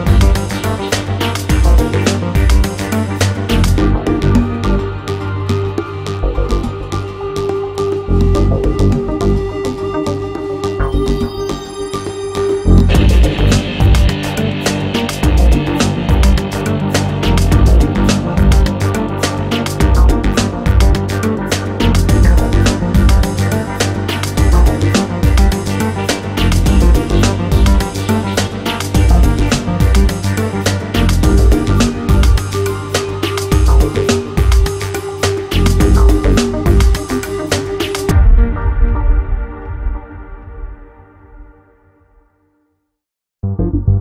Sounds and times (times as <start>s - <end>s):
Music: 0.0s - 44.0s.